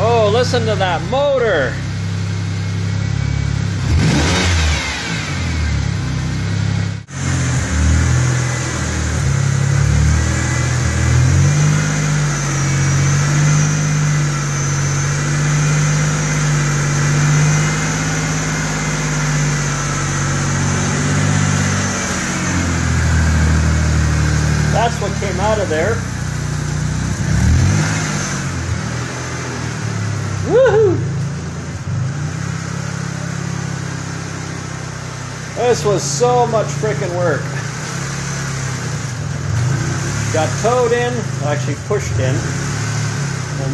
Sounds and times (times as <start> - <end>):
Car: 0.0 - 43.7
Engine: 0.0 - 43.7.